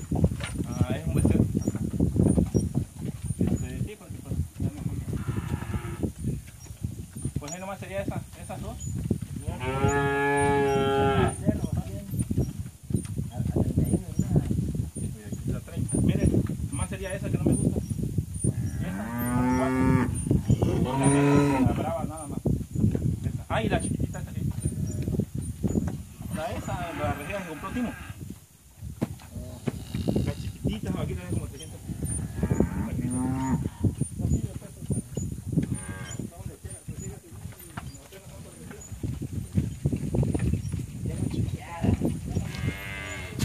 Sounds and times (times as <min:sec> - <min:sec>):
Moo: 0:09.6 - 0:11.4, 0:18.7 - 0:21.7, 0:32.3 - 0:33.6, 0:42.5 - 0:43.4.